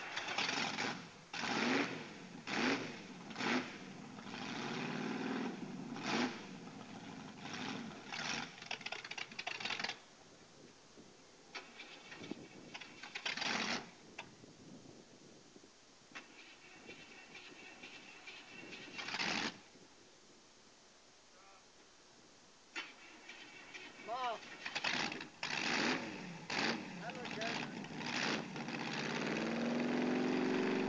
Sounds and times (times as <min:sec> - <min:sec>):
Engine starting: 0:00.0 - 0:02.6, 0:07.4 - 0:10.0, 0:11.5 - 0:13.9, 0:16.2 - 0:19.6, 0:22.8 - 0:26.8
Vehicle: 0:00.0 - 0:15.4, 0:16.1 - 0:19.9, 0:22.7 - 0:30.8
Accelerating, revving, vroom: 0:00.4 - 0:06.5, 0:07.4 - 0:08.5, 0:24.8 - 0:30.8
Speech: 0:21.4 - 0:21.7, 0:24.1 - 0:24.4, 0:27.0 - 0:27.8.